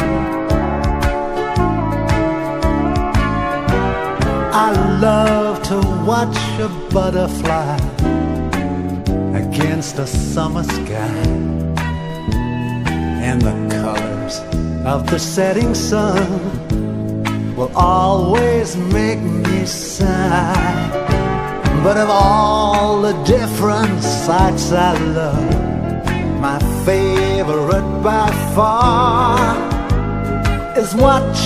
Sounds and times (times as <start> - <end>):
Music: 0.0 - 31.4.